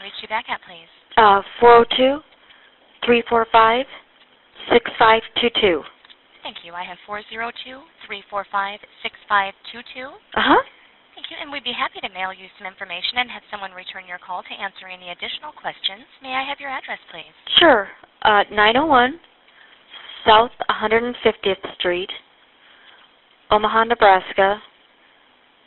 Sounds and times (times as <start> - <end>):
Speech: 0.0 - 2.3, 3.0 - 4.0, 4.6 - 19.2, 20.2 - 22.2, 23.5 - 24.7.